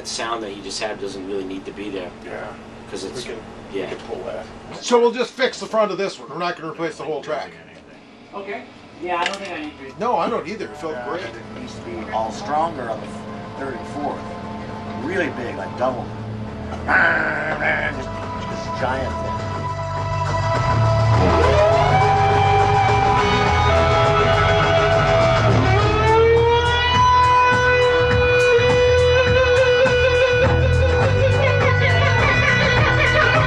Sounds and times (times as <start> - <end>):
Music: 10.5 - 33.4.